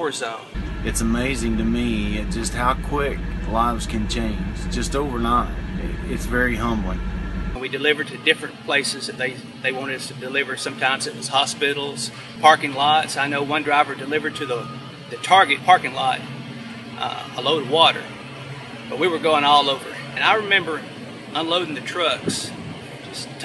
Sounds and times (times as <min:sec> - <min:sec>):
Speech: 0:00.0 - 0:07.0, 0:07.6 - 0:16.3, 0:17.0 - 0:18.1, 0:18.9 - 0:23.4
Vehicle: 0:00.6 - 0:07.6, 0:12.1 - 0:23.4.